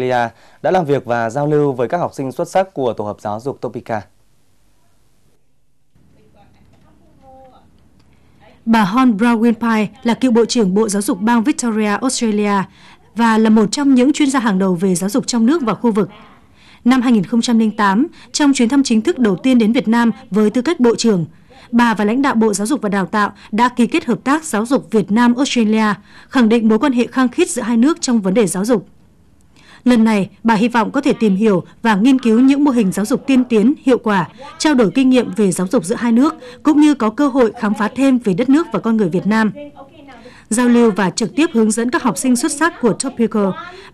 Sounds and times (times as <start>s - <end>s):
Speech: 8.4s - 28.8s, 29.9s - 43.8s.